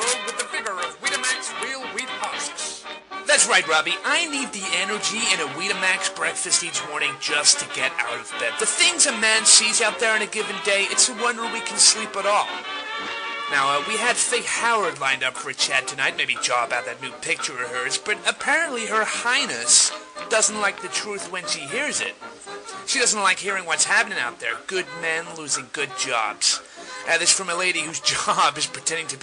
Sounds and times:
Speech: 0:00.0 - 0:12.5, 0:13.5 - 0:22.2, 0:22.9 - 0:29.2
Music: 0:00.0 - 0:29.2.

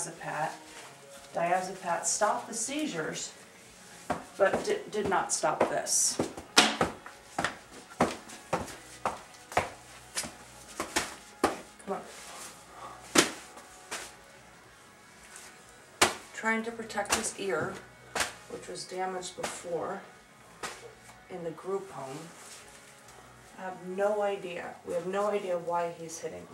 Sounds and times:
Speech: 0:01.4 - 0:03.3, 0:04.4 - 0:06.2, 0:11.9 - 0:12.1, 0:16.4 - 0:17.8, 0:18.5 - 0:20.0, 0:21.3 - 0:22.3, 0:23.6 - 0:26.5.

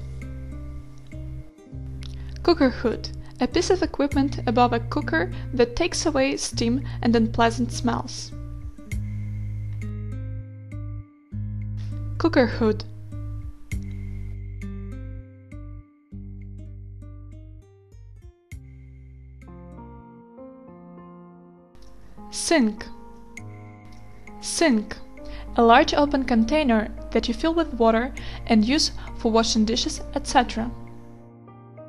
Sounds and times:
Music: 0:00.0 - 0:31.8
Speech: 0:02.4 - 0:08.3, 0:12.2 - 0:12.9, 0:22.3 - 0:23.0, 0:24.4 - 0:25.0, 0:25.6 - 0:30.8.

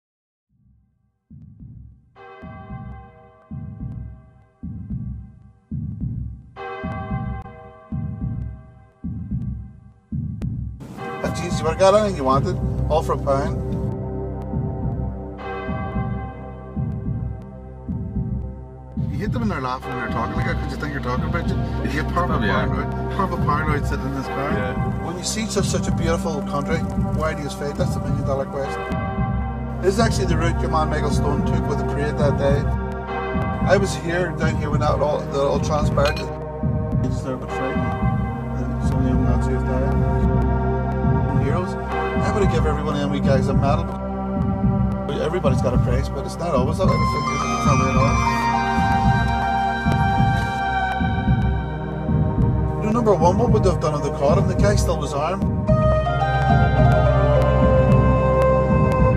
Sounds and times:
Throbbing: 0:01.3 - 0:59.1.

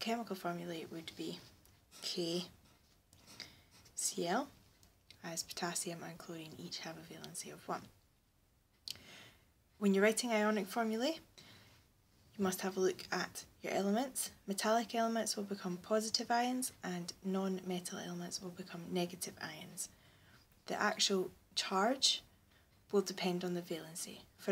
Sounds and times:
Speech: 0:00.0 - 0:02.5, 0:04.0 - 0:04.5, 0:05.2 - 0:07.9, 0:09.8 - 0:11.2, 0:12.4 - 0:19.9, 0:20.6 - 0:22.3, 0:22.9 - 0:24.5.

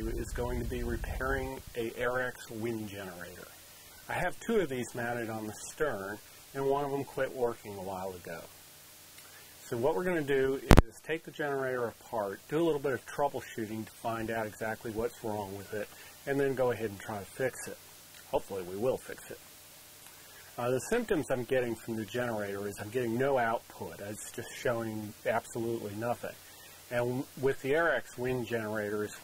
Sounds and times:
Speech: 0:00.0 - 0:08.6, 0:09.6 - 0:19.4, 0:20.6 - 0:29.2
Rustling leaves: 0:00.0 - 0:09.6.

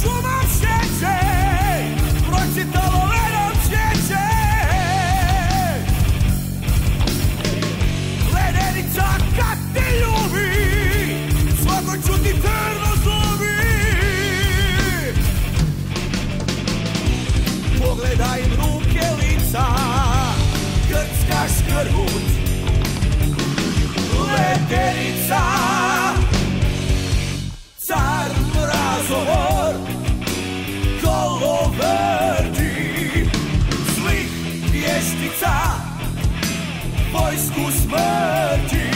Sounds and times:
Music: 0:00.0 - 0:38.9.

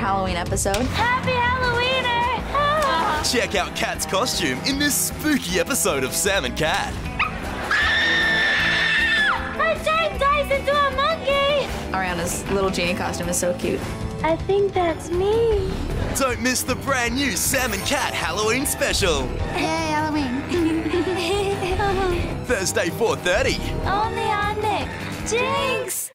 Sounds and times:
Music: 0:00.0 - 0:26.1.

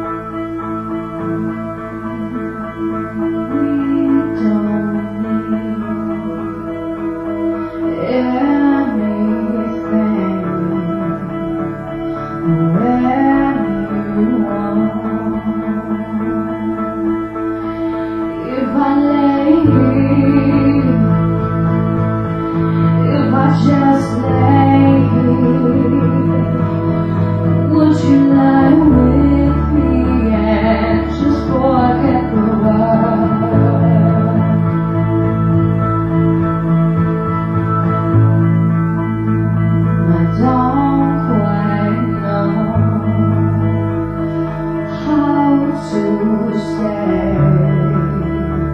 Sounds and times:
Music: 0:00.0 - 0:48.7
Female singing: 0:03.4 - 0:06.0, 0:08.0 - 0:11.3, 0:12.6 - 0:16.5, 0:18.4 - 0:21.2, 0:23.0 - 0:26.6, 0:27.7 - 0:34.6, 0:45.0 - 0:48.6.

